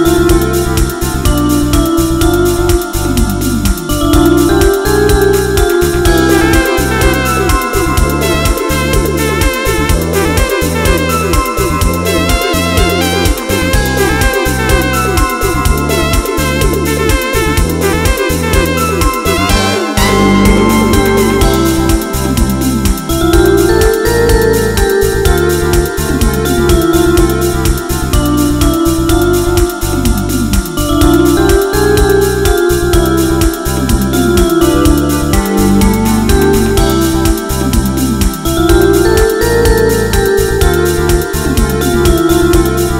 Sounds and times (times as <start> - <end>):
Happy music: 0.0 - 42.9.